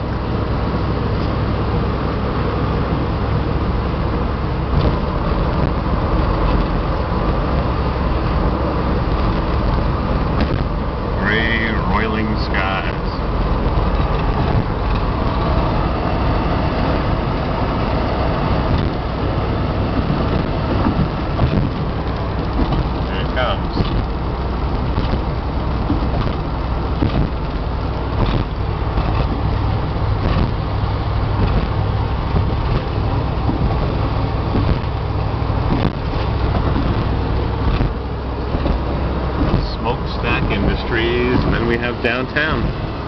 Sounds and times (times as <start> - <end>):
Speech: 11.2 - 13.2, 23.1 - 23.9, 39.6 - 42.7.